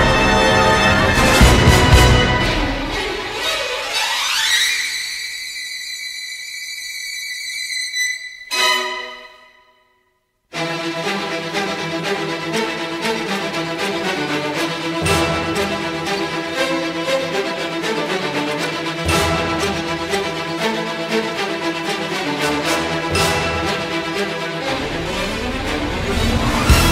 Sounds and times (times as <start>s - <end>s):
Music: 0.0s - 3.9s, 8.4s - 26.9s.